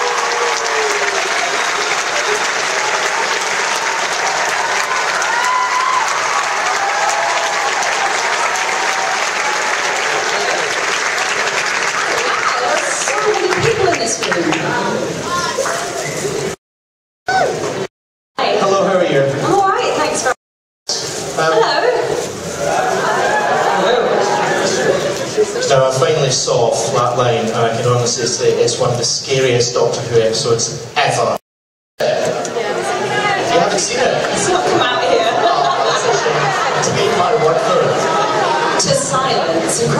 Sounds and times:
Inside, public space: 0.0 - 16.6, 17.3 - 31.4, 32.0 - 39.9.

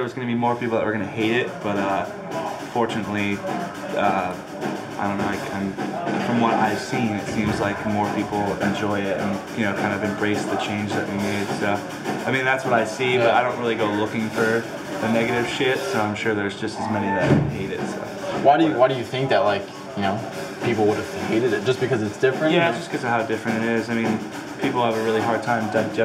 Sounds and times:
Speech: 0.0 - 2.1, 2.7 - 4.4, 5.0 - 26.0
Music: 0.0 - 26.0.

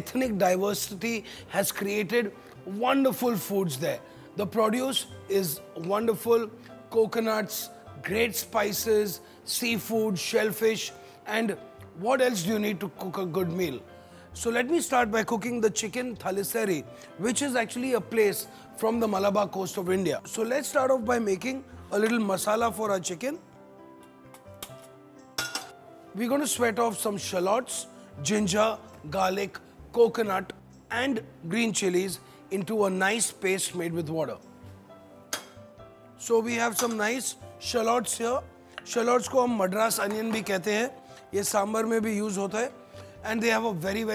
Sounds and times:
Speech: 0.0 - 13.8, 14.4 - 23.4, 26.2 - 34.4, 36.2 - 44.1
Music: 0.0 - 44.1.

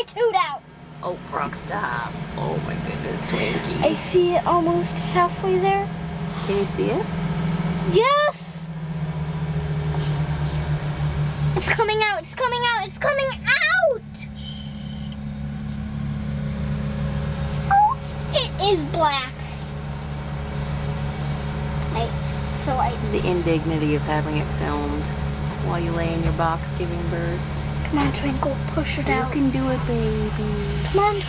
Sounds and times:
Speech: 21.9 - 31.2.

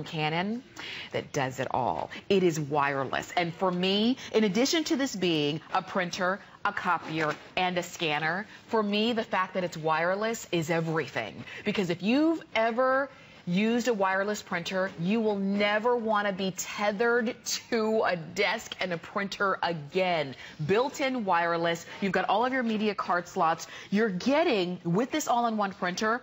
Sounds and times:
Speech: 0.0 - 26.2.

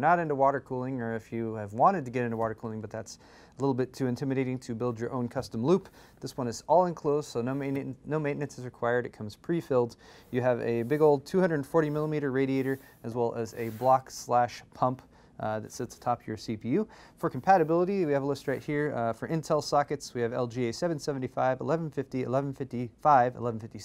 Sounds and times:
Speech: 0.0 - 23.8.

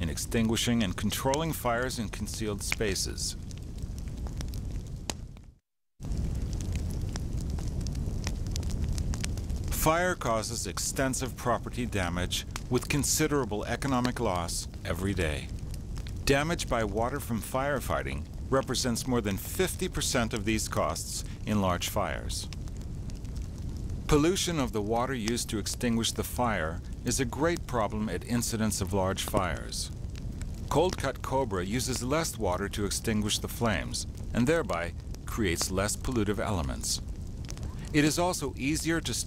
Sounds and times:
Speech: 0.0 - 3.4, 9.7 - 15.5, 16.2 - 22.5, 24.1 - 30.0, 30.7 - 37.0, 37.8 - 39.2
Fire: 0.0 - 39.2.

